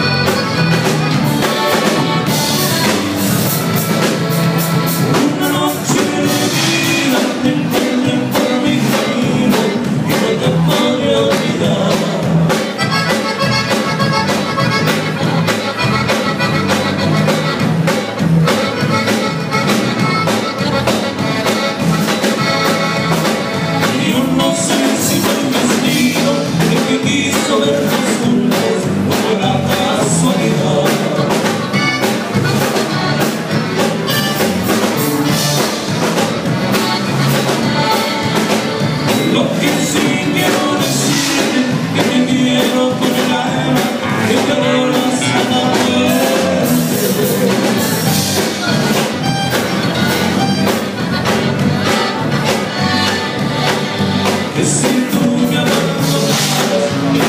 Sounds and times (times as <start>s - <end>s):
Blues: 0.0s - 57.2s.